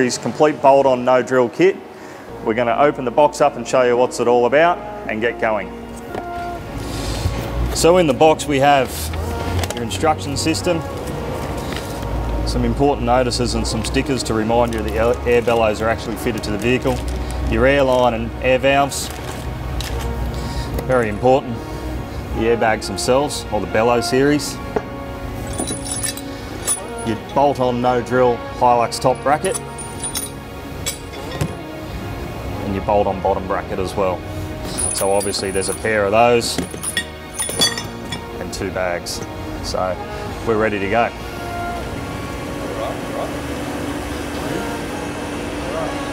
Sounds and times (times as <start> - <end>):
Music: 0.0 - 46.1.